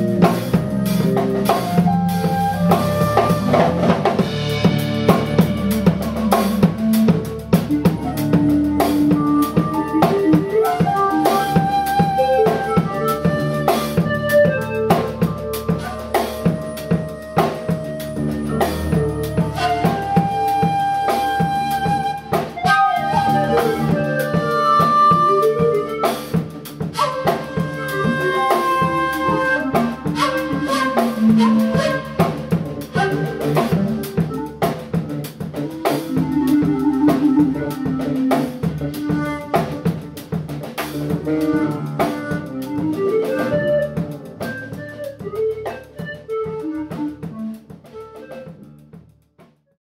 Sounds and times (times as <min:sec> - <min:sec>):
Guitar: 0:00.0 - 0:47.3
Drum: 0:00.0 - 0:49.6.